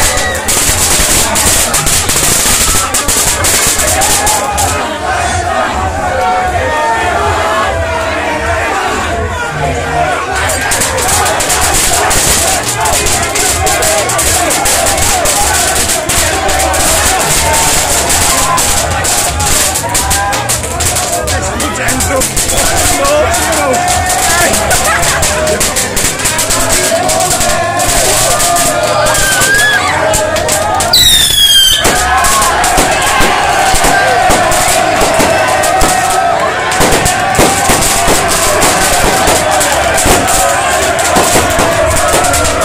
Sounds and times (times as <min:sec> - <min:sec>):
Music: 0:00.0 - 0:42.6.